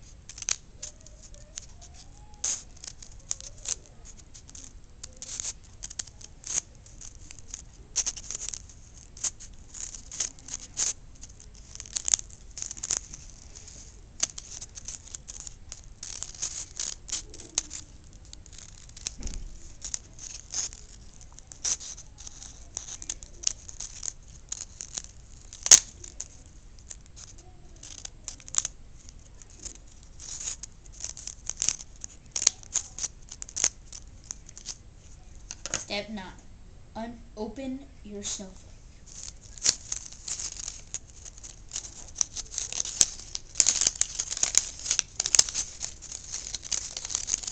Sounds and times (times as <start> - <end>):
Scissors: 0.3 - 34.8, 39.1 - 47.5.